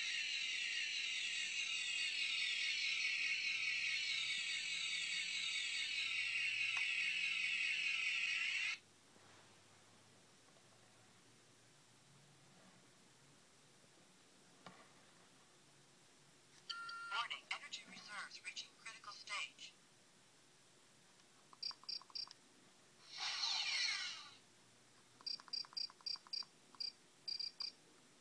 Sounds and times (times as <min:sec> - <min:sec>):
Inside, small room: 0:00.0 - 0:28.2.